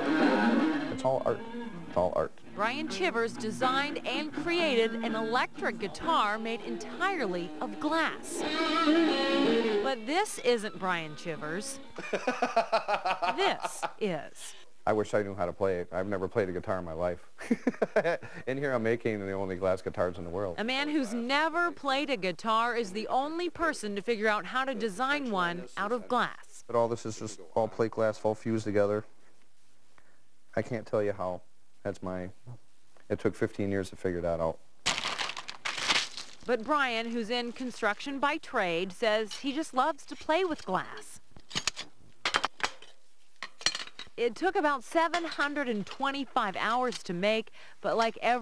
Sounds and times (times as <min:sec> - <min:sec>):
Strum: 0:00.0 - 0:11.8
Acoustic guitar: 0:00.0 - 0:12.4.